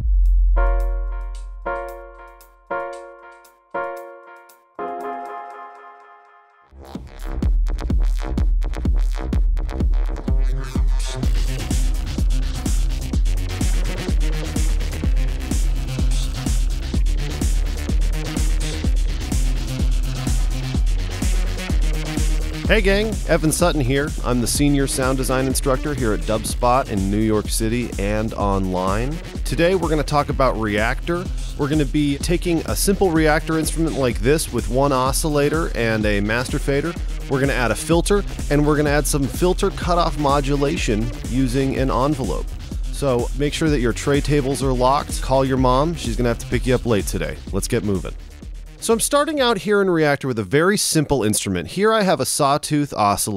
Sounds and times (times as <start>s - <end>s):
Music: 0.0s - 50.2s
Speech: 22.7s - 48.1s, 48.8s - 53.3s.